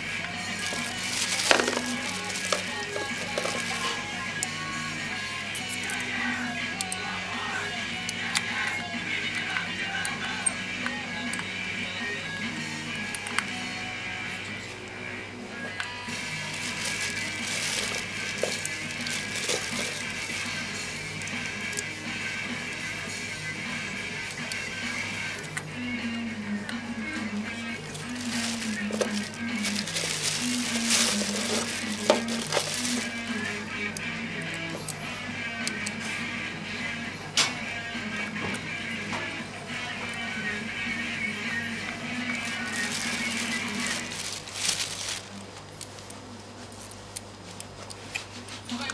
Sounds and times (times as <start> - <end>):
Music: 0.0 - 48.9.